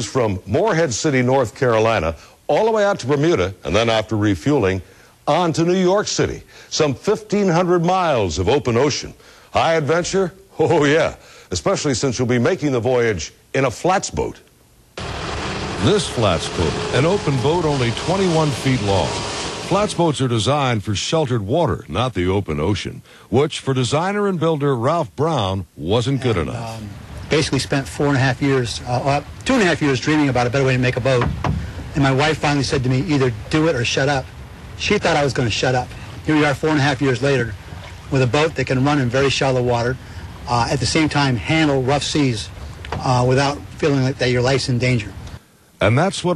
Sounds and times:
Speech: 0.0s - 14.5s, 15.8s - 31.3s, 31.9s - 45.2s, 45.8s - 46.3s.

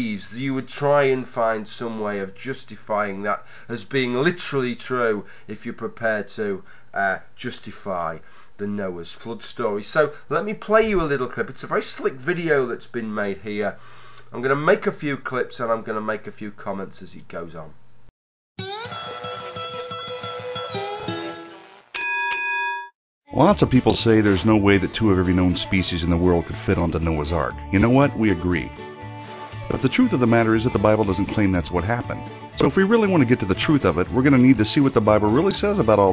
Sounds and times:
Speech: 0.0s - 17.8s, 23.3s - 28.8s, 29.7s - 36.1s
Music: 18.6s - 21.9s, 23.3s - 36.1s
Ding-dong: 22.0s - 22.9s.

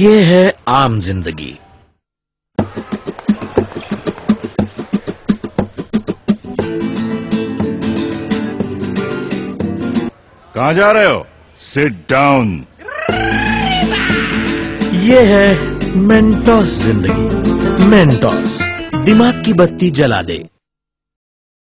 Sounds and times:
Music: 2.6s - 10.1s, 13.1s - 20.0s
Speech: 15.0s - 17.2s, 17.8s - 20.5s.

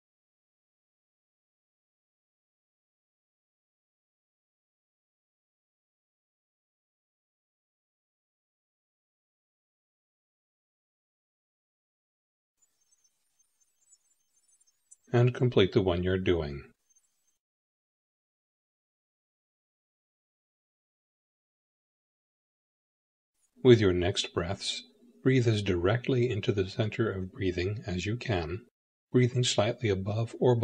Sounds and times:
Speech synthesizer: 15.2s - 16.7s, 23.7s - 30.6s.

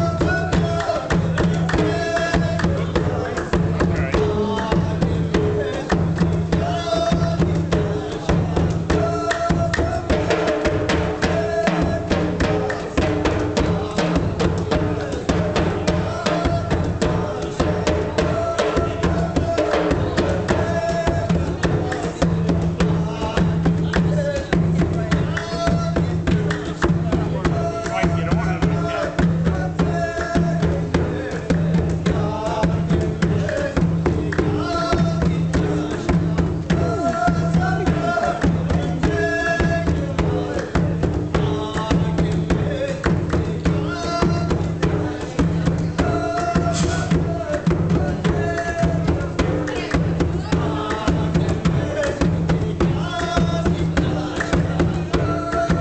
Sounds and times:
Middle Eastern music: 0.0s - 55.8s.

